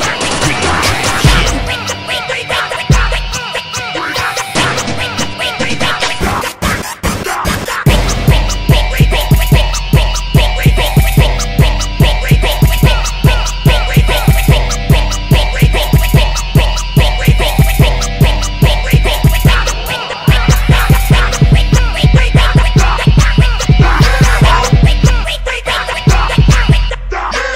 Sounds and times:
Punk rock: 0:00.0 - 0:27.5
Rock and roll: 0:00.0 - 0:27.5.

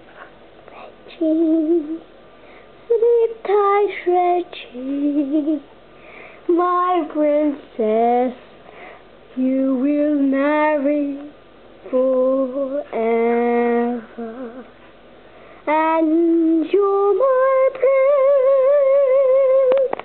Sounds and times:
Female singing: 0:01.1 - 0:02.0, 0:02.9 - 0:05.6, 0:06.5 - 0:08.4, 0:09.4 - 0:14.7, 0:15.7 - 0:20.0.

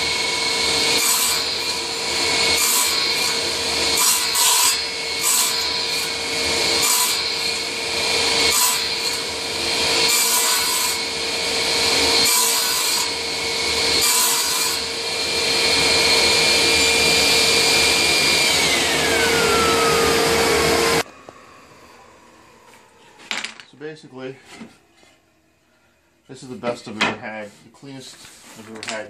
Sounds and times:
Power tool: 0:00.0 - 0:23.0
Wood: 0:23.2 - 0:23.8
Speech: 0:23.7 - 0:24.5, 0:26.3 - 0:29.1.

